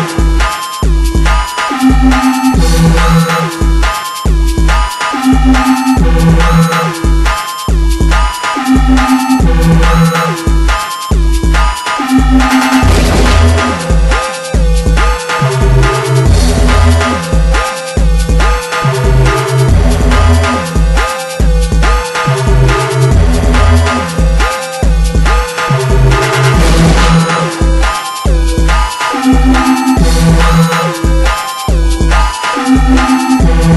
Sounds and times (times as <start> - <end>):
Music: 0.0 - 33.7.